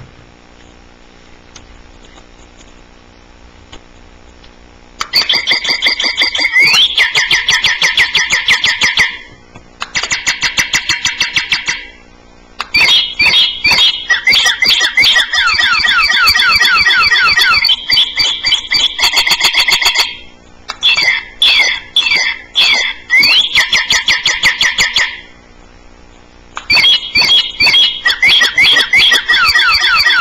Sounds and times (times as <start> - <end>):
Bird: 12.8 - 25.3, 26.7 - 30.2.